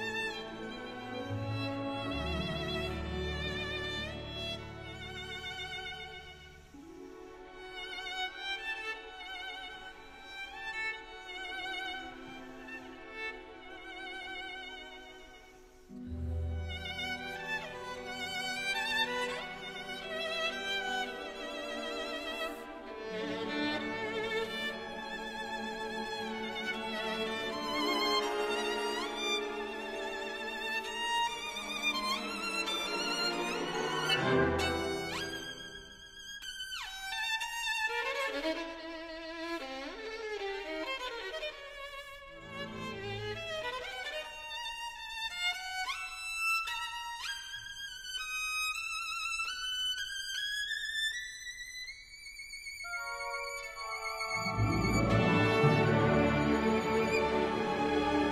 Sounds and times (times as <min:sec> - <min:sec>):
Violin, fiddle: 0:00.0 - 0:58.3.